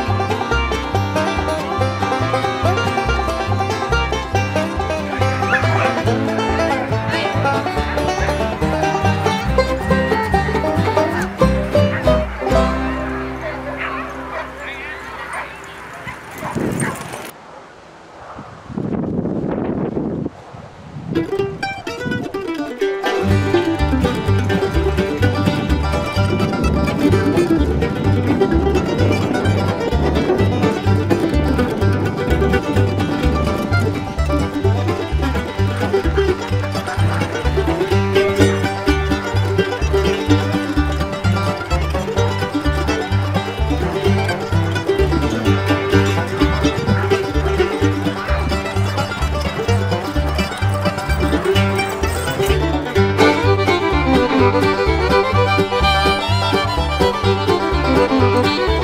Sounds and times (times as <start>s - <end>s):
Mandolin: 0.0s - 15.9s, 21.2s - 58.8s
Dog: 5.5s - 6.0s, 13.8s - 17.3s.